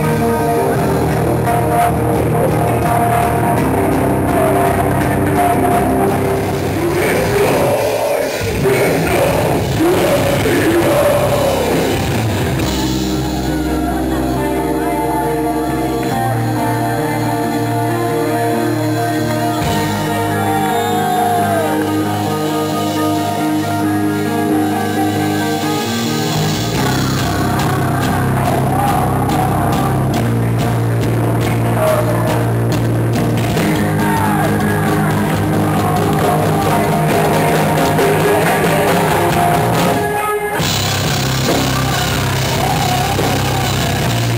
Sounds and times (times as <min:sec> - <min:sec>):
Inside, large room or hall: 0:00.0 - 0:44.3
Music: 0:00.0 - 0:44.3
Singing: 0:00.0 - 0:44.3.